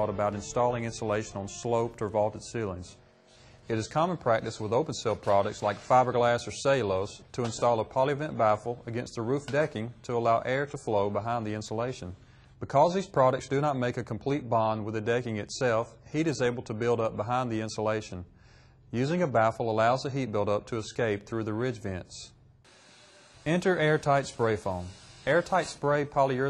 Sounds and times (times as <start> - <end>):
Speech: 0.0 - 3.0, 3.7 - 18.3, 18.9 - 22.4, 23.5 - 26.4.